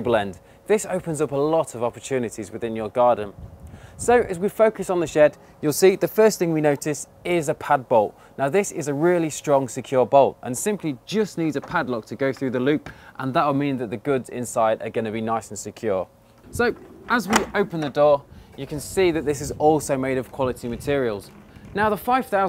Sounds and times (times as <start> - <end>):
Speech: 0.0 - 3.4, 4.0 - 22.4.